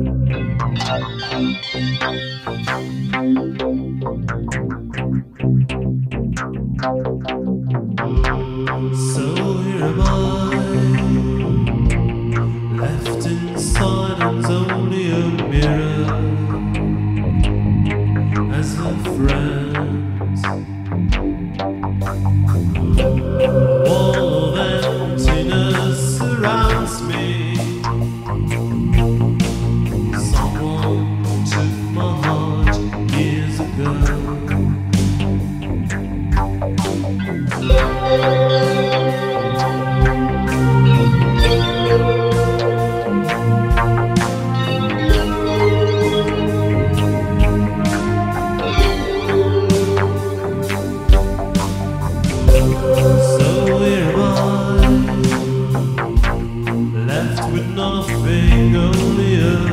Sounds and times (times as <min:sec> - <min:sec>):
Soul music: 0:00.0 - 0:07.2, 0:07.8 - 0:59.7
Background music: 0:00.0 - 0:59.7.